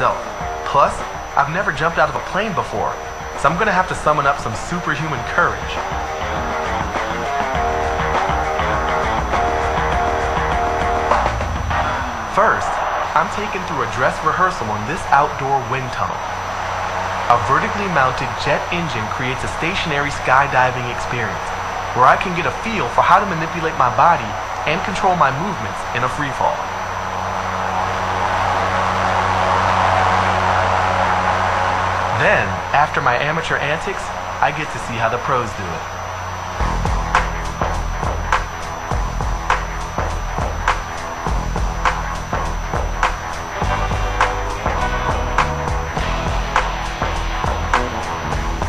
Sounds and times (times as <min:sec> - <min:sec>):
Speech: 0:00.0 - 0:05.8, 0:12.3 - 0:16.2, 0:17.3 - 0:26.6, 0:32.1 - 0:35.9.